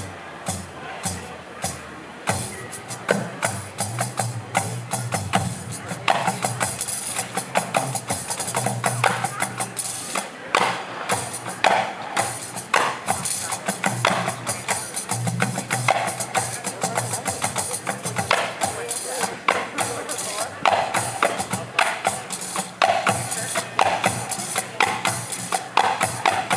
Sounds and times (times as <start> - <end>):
Music: 0.0 - 26.5
Speech: 0.0 - 26.5.